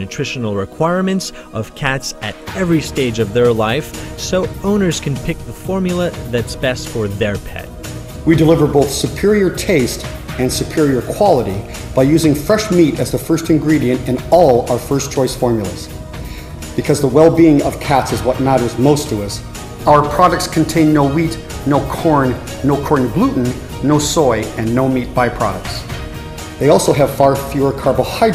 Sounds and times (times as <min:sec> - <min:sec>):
Speech: 0:00.0 - 0:07.7, 0:08.3 - 0:15.9, 0:16.8 - 0:25.9, 0:26.6 - 0:28.3
Music: 0:00.0 - 0:28.3.